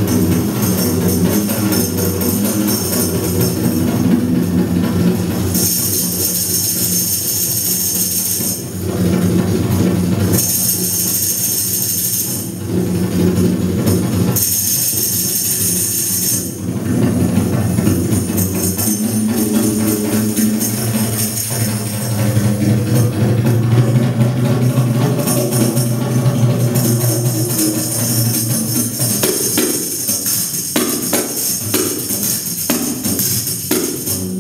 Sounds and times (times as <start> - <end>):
Percussion: 0.0 - 34.4.